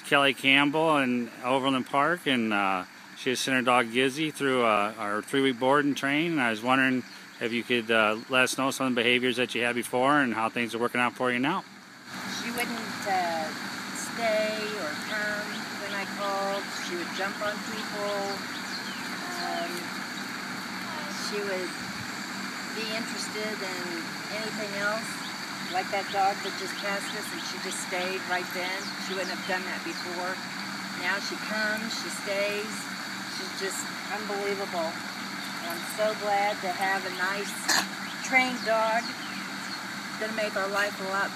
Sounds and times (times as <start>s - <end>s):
Speech: 0.0s - 11.6s, 12.3s - 18.4s, 19.2s - 19.8s, 20.9s - 21.7s, 22.8s - 30.4s, 31.0s - 35.0s, 35.6s - 39.1s, 40.2s - 41.3s.